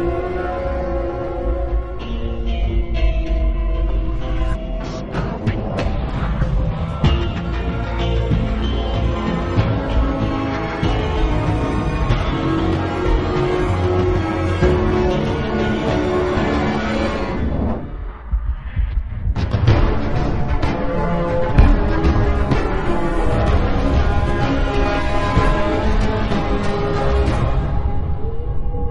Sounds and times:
Music: 0.0s - 28.9s.

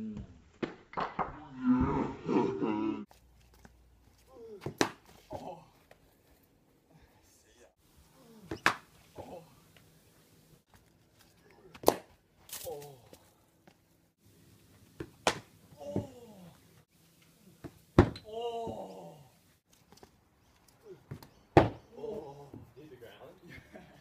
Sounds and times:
Outside, rural or natural: 0.0s - 24.0s.

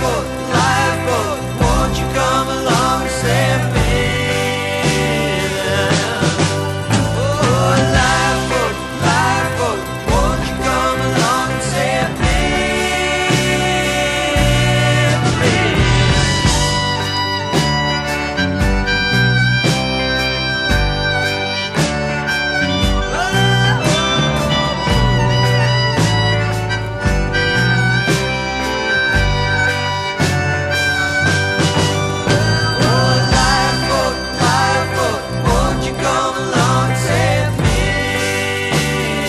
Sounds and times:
Soul music: 0.0s - 39.2s.

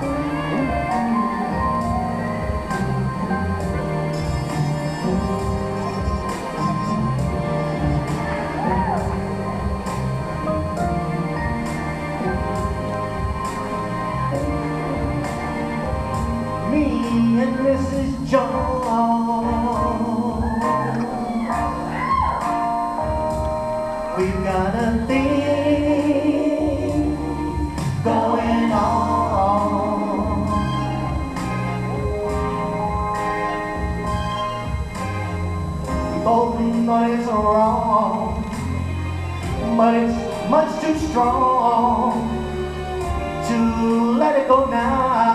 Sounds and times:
Music: 0.0s - 45.3s
Male singing: 16.7s - 21.8s, 24.2s - 31.2s, 36.1s - 38.6s, 39.6s - 42.5s, 43.4s - 45.3s.

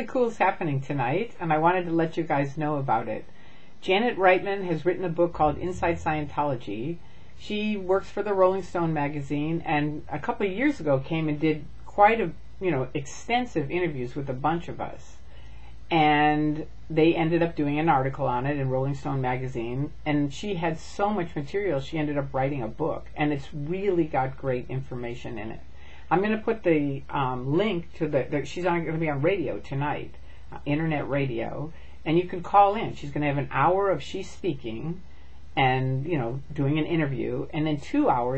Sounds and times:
Speech: 0.0s - 15.2s, 15.9s - 35.0s, 35.6s - 38.3s.

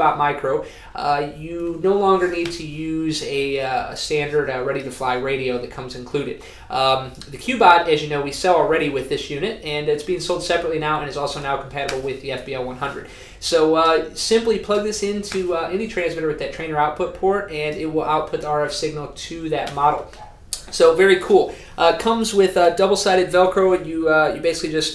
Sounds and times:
Speech: 0.0s - 24.9s.

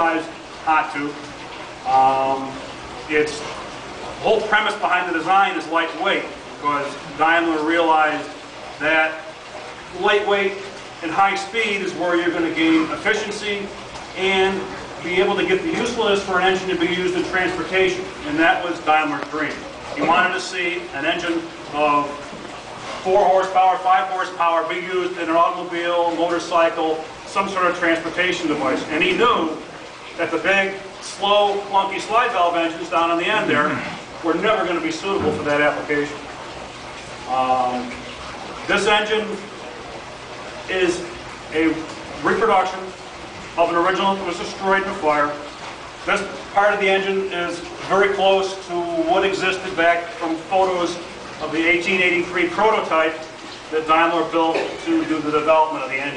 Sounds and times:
Speech: 0.0s - 1.2s, 1.8s - 3.5s, 4.2s - 9.3s, 9.9s - 22.3s, 23.0s - 36.2s, 37.3s - 37.9s, 38.7s - 39.5s, 40.7s - 43.0s, 43.6s - 56.1s.

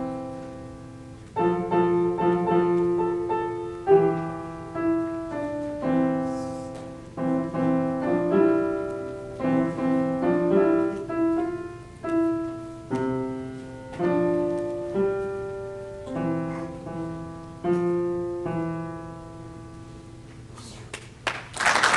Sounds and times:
Piano: 0.0s - 21.9s.

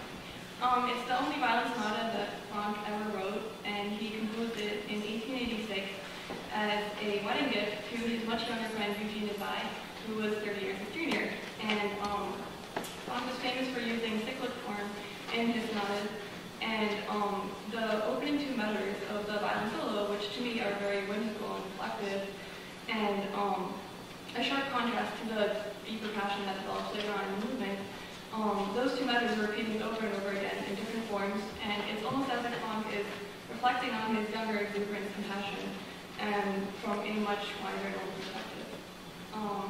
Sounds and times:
Speech: 0.6s - 12.5s, 13.1s - 39.7s.

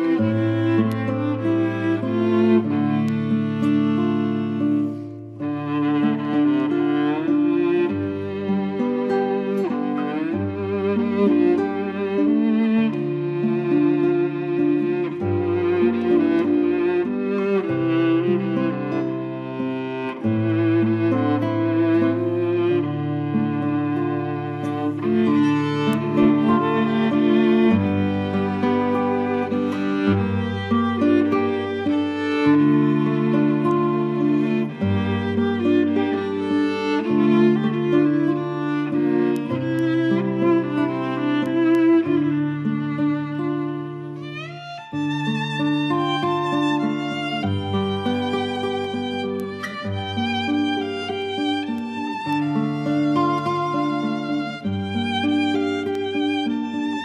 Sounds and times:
Music: 0.0s - 57.0s.

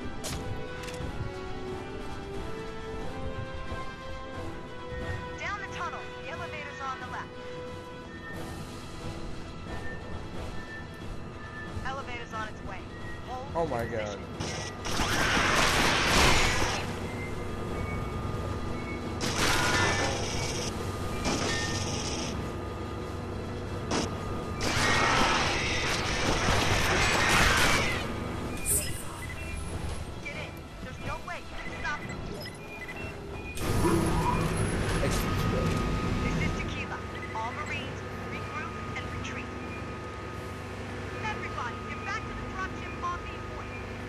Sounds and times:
Music: 0.0s - 21.7s.

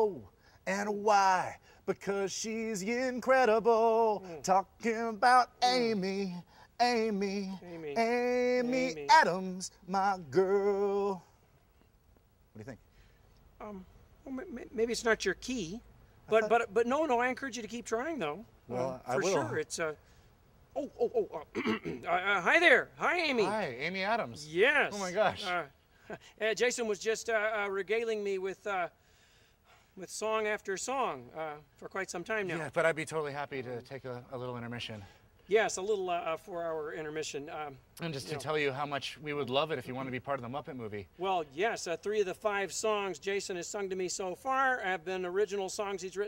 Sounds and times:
Speech: 7.4s - 10.2s, 12.6s - 12.8s, 13.6s - 20.0s, 20.8s - 25.7s, 26.4s - 28.9s, 30.0s - 46.2s.

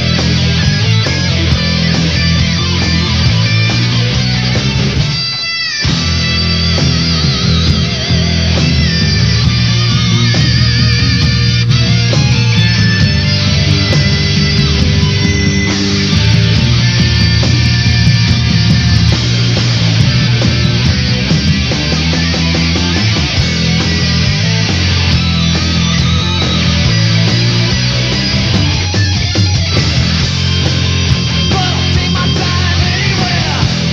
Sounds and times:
Music: 0.0s - 33.9s.

